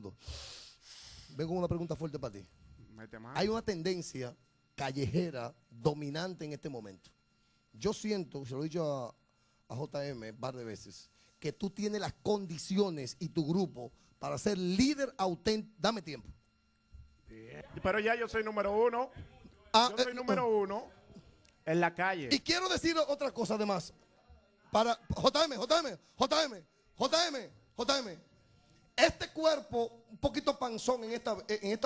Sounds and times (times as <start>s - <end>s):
Speech: 1.4s - 7.1s, 7.8s - 16.3s, 17.3s - 20.9s, 21.7s - 23.9s, 24.8s - 28.2s, 29.0s - 31.8s.